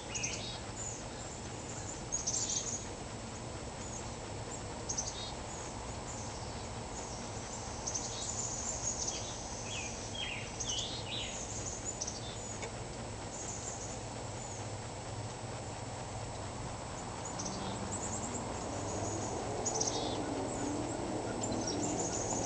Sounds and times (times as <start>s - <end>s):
Outside, rural or natural: 0.0s - 22.4s.